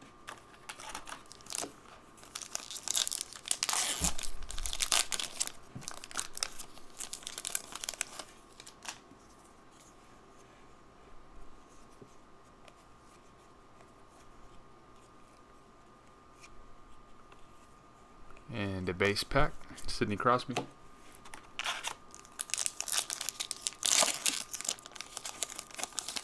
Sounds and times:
Crumpling, crinkling: 0.2s - 10.0s, 21.1s - 26.2s.

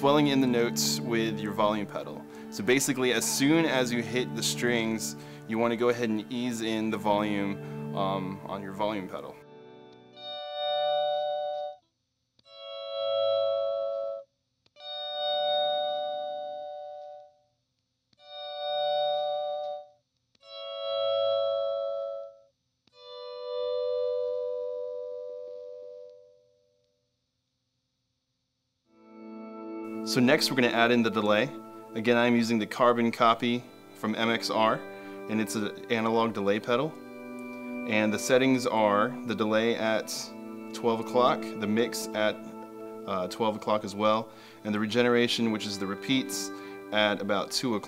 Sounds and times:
Speech: 0.0s - 9.4s, 30.1s - 37.0s, 37.9s - 42.4s, 43.1s - 47.8s
Effects unit: 0.0s - 11.8s, 12.4s - 14.2s, 14.8s - 17.4s, 18.2s - 26.6s, 28.9s - 47.8s
Guitar: 0.0s - 11.8s, 12.5s - 14.2s, 29.0s - 47.8s
Inside, small room: 0.0s - 47.8s.

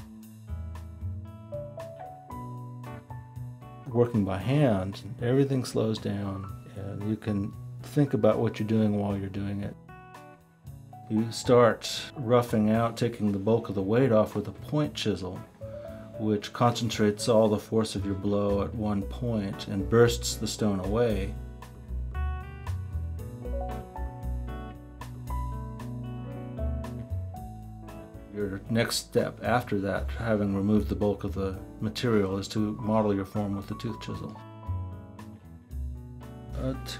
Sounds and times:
Music: 0.0s - 36.9s
Speech: 3.9s - 9.8s, 11.1s - 15.5s, 16.2s - 21.4s, 28.3s - 34.4s, 36.5s - 36.9s.

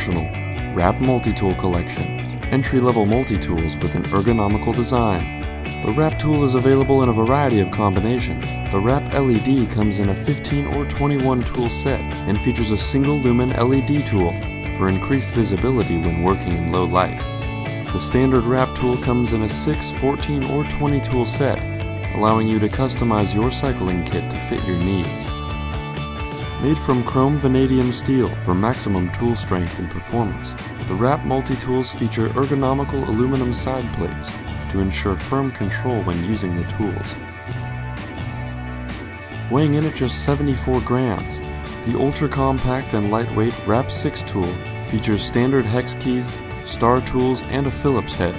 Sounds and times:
Speech: 0.0s - 17.2s, 17.9s - 25.3s, 26.6s - 37.2s, 39.4s - 48.3s
Music: 0.0s - 48.3s.

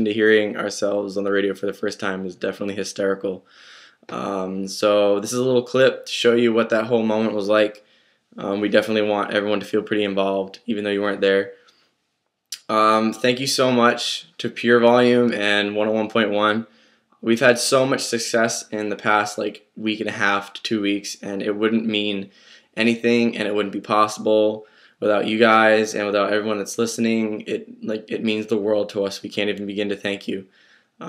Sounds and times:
Speech: 0.0s - 3.5s, 4.1s - 7.8s, 8.4s - 11.6s, 12.6s - 31.0s.

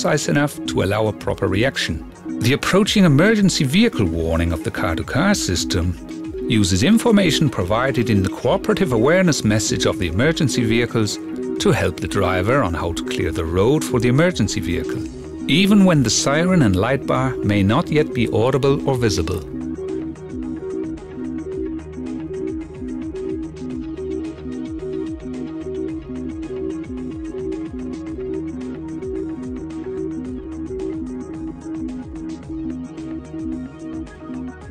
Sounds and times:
Speech: 0.0s - 19.5s
Music: 0.0s - 34.7s.

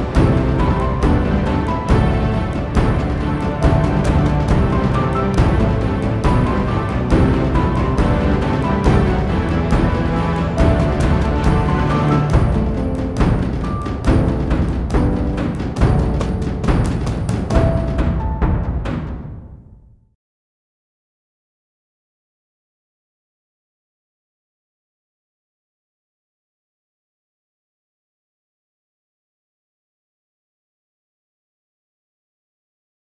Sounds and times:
Music: 0.0s - 20.2s.

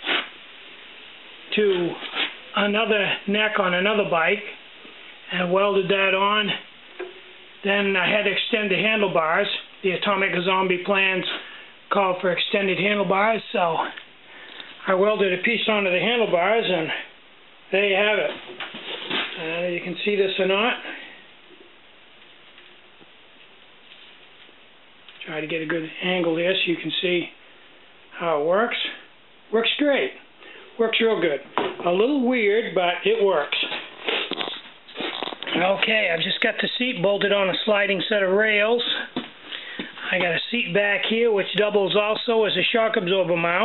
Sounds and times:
Inside, small room: 0.0s - 43.6s
Speech: 1.5s - 4.6s, 5.3s - 6.7s, 7.6s - 14.0s, 14.8s - 17.1s, 17.7s - 18.4s, 19.3s - 21.1s, 25.2s - 27.4s, 28.1s - 30.2s, 30.8s - 33.8s, 35.5s - 39.2s, 40.0s - 43.6s.

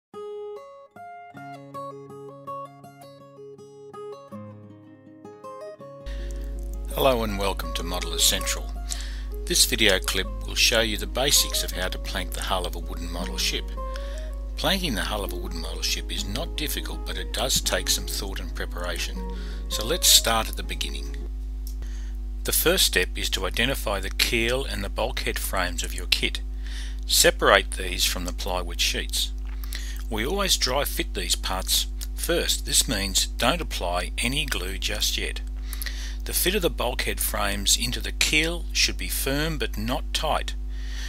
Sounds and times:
Acoustic guitar: 0.1s - 22.0s.

